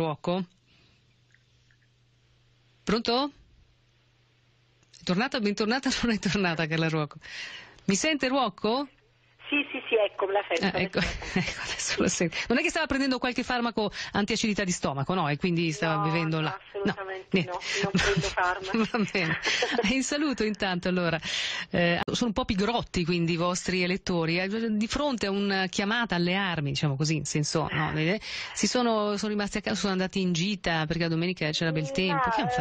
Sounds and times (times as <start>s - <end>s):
Speech: 25.1s - 32.6s.